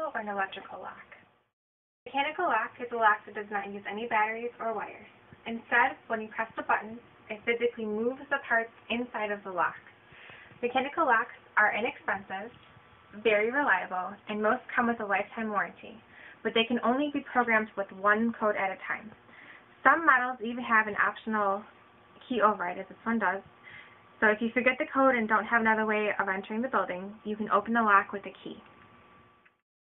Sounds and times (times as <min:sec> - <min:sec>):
Speech: 0:00.0 - 0:01.2, 0:02.1 - 0:09.9, 0:10.6 - 0:12.6, 0:13.2 - 0:19.2, 0:19.8 - 0:23.5, 0:24.2 - 0:28.7.